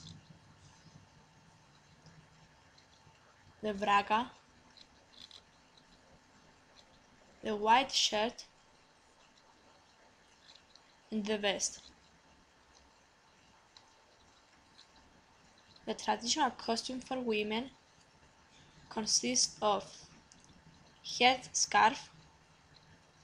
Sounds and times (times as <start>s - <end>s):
Speech: 3.6s - 4.4s, 7.4s - 8.4s, 11.1s - 11.8s, 15.9s - 17.7s, 18.9s - 20.0s, 21.1s - 22.1s.